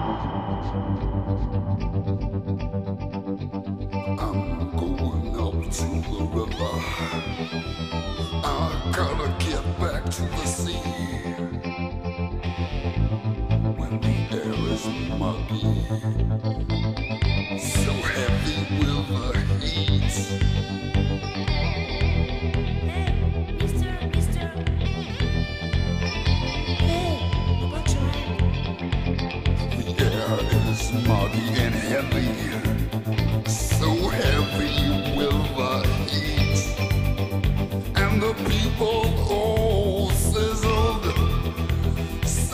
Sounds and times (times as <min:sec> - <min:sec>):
Music: 0:00.0 - 0:42.5
Speech: 0:04.1 - 0:07.6, 0:08.4 - 0:11.6, 0:13.8 - 0:16.2, 0:17.6 - 0:20.6, 0:22.9 - 0:24.7, 0:26.8 - 0:28.4, 0:29.8 - 0:32.9, 0:33.5 - 0:36.9, 0:38.0 - 0:42.5.